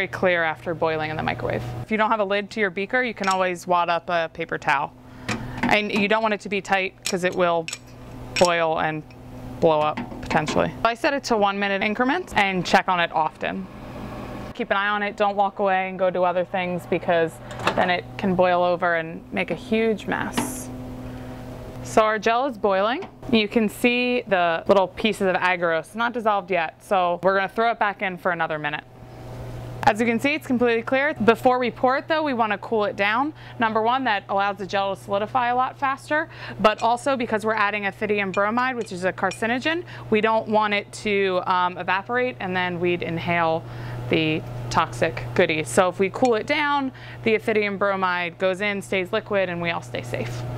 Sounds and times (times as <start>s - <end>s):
Speech: 0.0s - 4.9s, 5.7s - 7.7s, 8.4s - 9.0s, 9.6s - 13.6s, 14.6s - 20.7s, 21.9s - 28.8s, 29.8s - 50.4s.